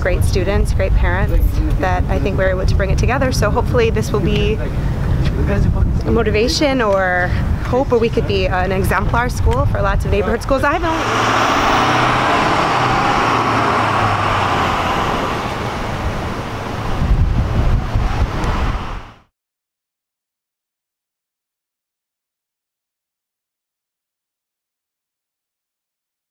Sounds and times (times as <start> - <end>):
Speech: 0.0 - 4.7, 5.3 - 11.0
Outside, urban or manmade: 0.0 - 19.3.